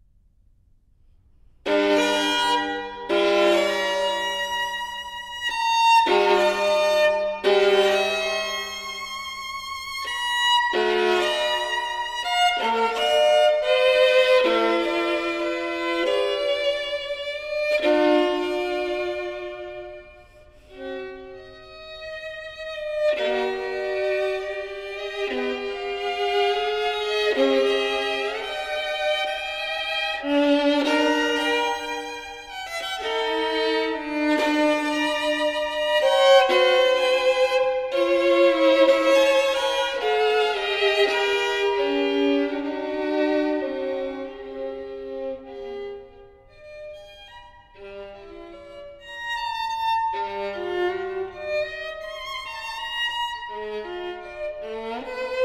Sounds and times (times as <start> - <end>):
Violin, fiddle: 1.6 - 55.4.